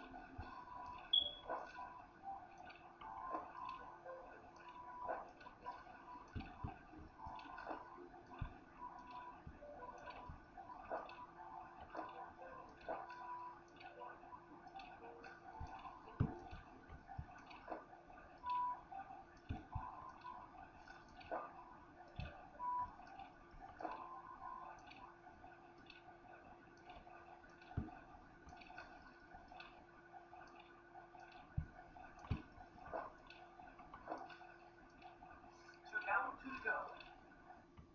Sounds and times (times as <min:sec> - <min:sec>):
Tick-tock: 0:00.0 - 0:37.9.